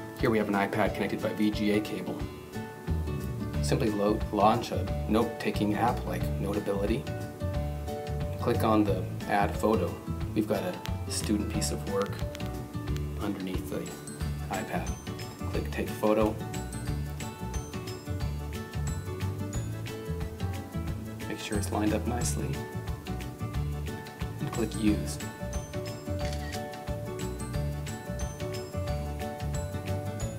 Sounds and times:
Music: 0.0 - 30.3
Speech: 0.2 - 2.3, 3.6 - 7.1, 8.4 - 12.2, 13.2 - 16.4, 21.2 - 22.6, 24.4 - 25.3
Single-lens reflex camera: 26.2 - 26.6.

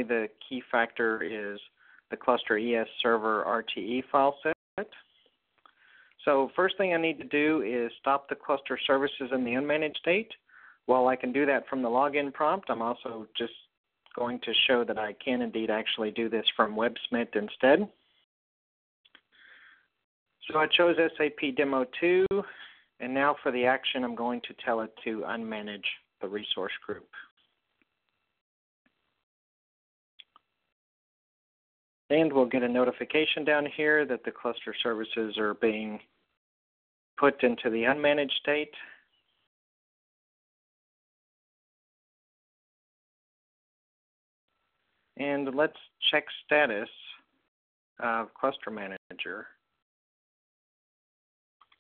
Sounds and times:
Speech: 0.0 - 5.0, 6.2 - 18.0, 20.4 - 27.3, 32.1 - 36.1, 37.2 - 39.0, 45.2 - 47.3, 48.0 - 49.6.

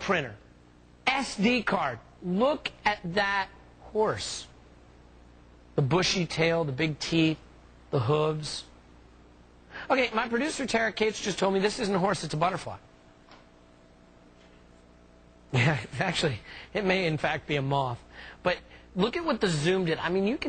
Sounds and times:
Speech: 0.0 - 0.4, 1.0 - 4.6, 5.8 - 8.7, 9.9 - 12.8, 15.6 - 20.4.

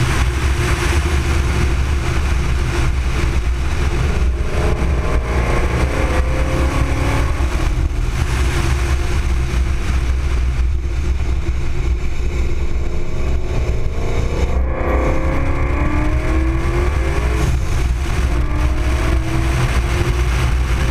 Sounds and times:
Car: 0.0 - 20.9.

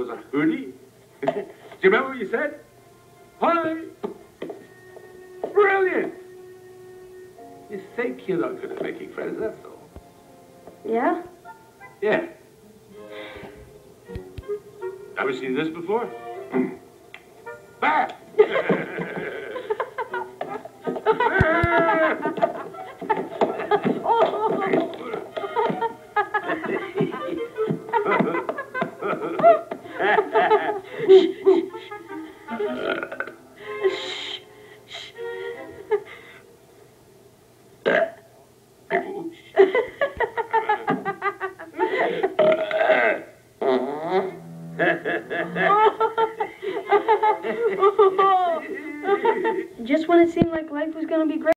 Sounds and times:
Fart: 32.7 - 33.4, 37.8 - 38.2, 42.4 - 45.6.

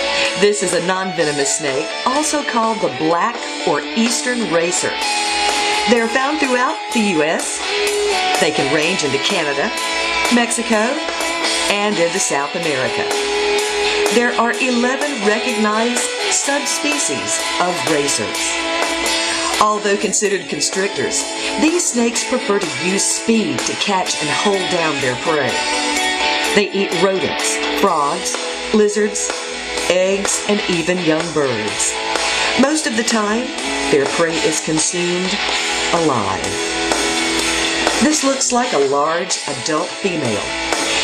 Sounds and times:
Music: 0.0 - 41.0
Speech: 0.2 - 5.0, 5.9 - 7.6, 8.4 - 11.1, 11.7 - 13.1, 14.1 - 18.5, 19.5 - 25.6, 26.5 - 29.3, 29.9 - 32.0, 32.6 - 36.6, 38.0 - 40.5.

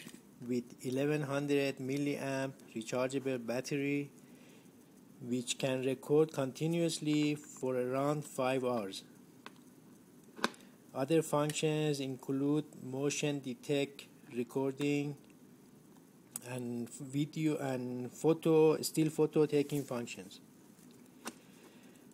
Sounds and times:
Speech: 0.4 - 4.1, 5.2 - 9.1, 11.0 - 15.2, 16.4 - 20.4.

